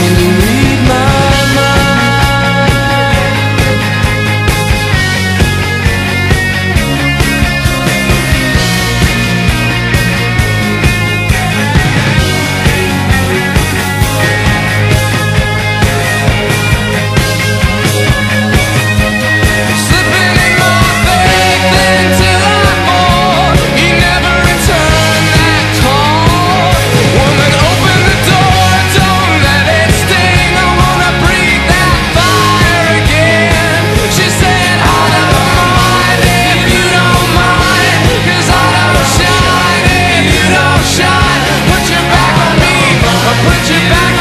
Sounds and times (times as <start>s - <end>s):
Punk rock: 0.0s - 44.2s.